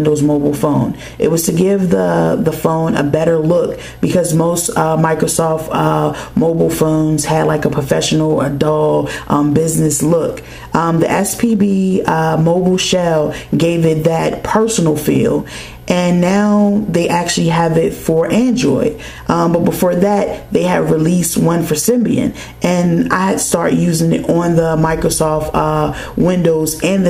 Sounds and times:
Speech: 0.0 - 27.0.

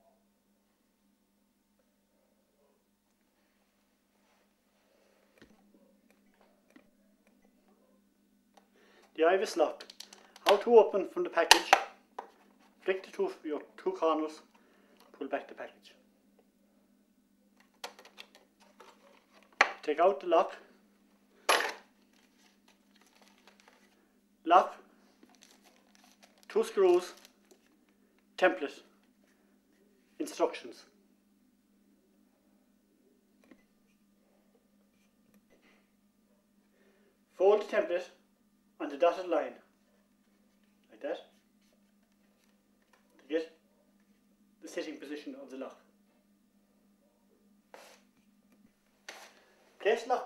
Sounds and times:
Speech: 9.2 - 11.9, 12.8 - 14.5, 15.2 - 16.1, 19.8 - 20.7, 24.4 - 24.9, 26.5 - 27.2, 28.4 - 28.9, 30.2 - 31.0, 37.3 - 38.2, 38.8 - 39.7, 40.9 - 41.4, 43.2 - 43.6, 44.6 - 45.9, 49.8 - 50.2.

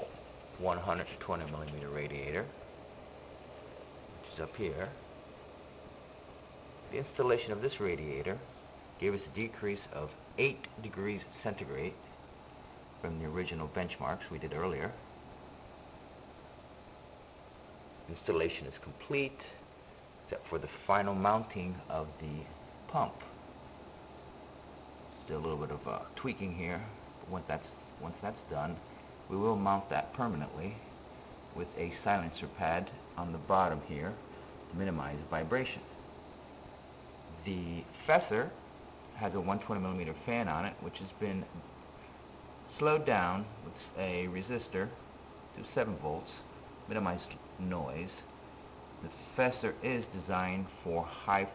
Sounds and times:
Speech: 0.0 - 2.6, 4.2 - 5.0, 6.9 - 12.1, 13.0 - 15.0, 18.1 - 23.4, 25.1 - 30.9, 31.5 - 35.9, 37.3 - 41.7, 42.7 - 48.3, 49.0 - 51.5.

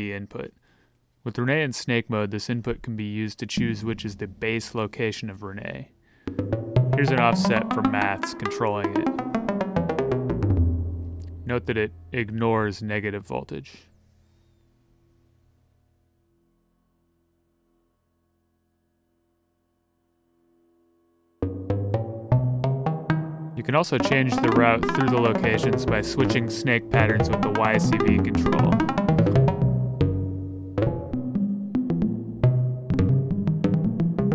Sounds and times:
Speech: 0.0 - 0.6, 1.2 - 6.0, 7.0 - 9.1, 11.5 - 13.9, 23.6 - 28.9
Music: 3.6 - 5.4, 6.2 - 12.8, 13.9 - 34.3.

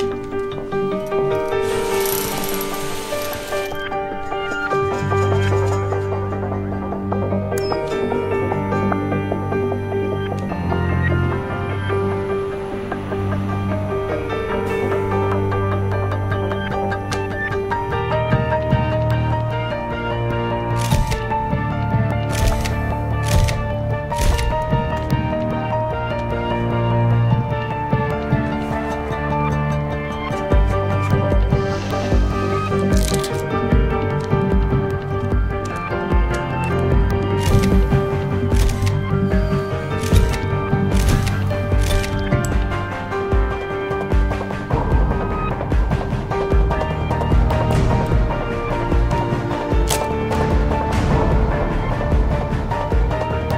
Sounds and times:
Tender music: 0.0 - 53.5.

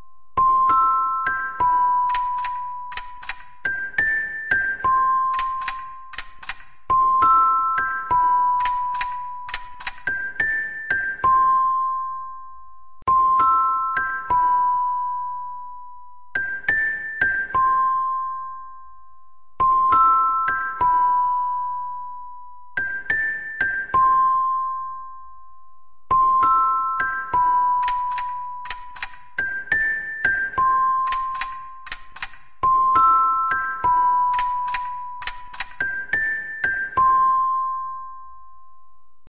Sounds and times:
Music: 0.0 - 39.3
Ringtone: 0.0 - 39.3.

